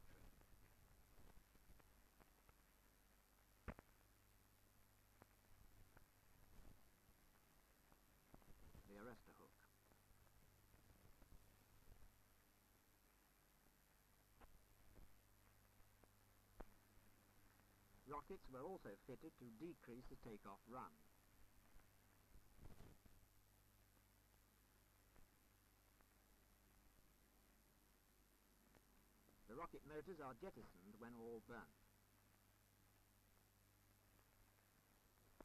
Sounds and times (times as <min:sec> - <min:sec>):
Speech: 0:08.8 - 0:09.7, 0:18.1 - 0:21.0, 0:29.5 - 0:31.8.